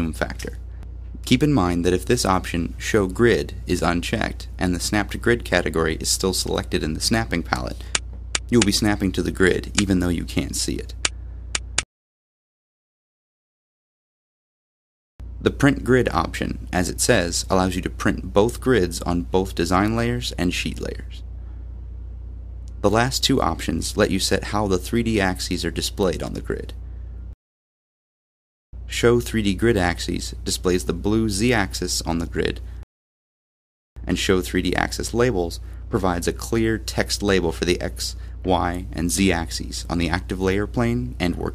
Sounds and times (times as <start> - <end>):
Speech: 0.0 - 0.6, 1.2 - 11.0, 15.4 - 21.2, 22.8 - 26.8, 28.9 - 32.7, 34.0 - 41.5.